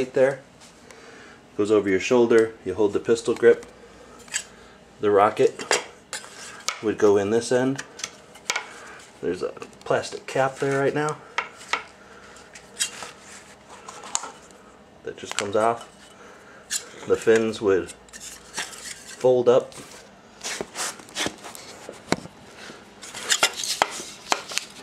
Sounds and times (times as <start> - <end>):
Speech: 0.0 - 0.4, 1.6 - 3.6, 5.0 - 5.7, 6.8 - 7.8, 9.2 - 11.2, 15.0 - 15.9, 17.0 - 18.0, 19.2 - 19.8.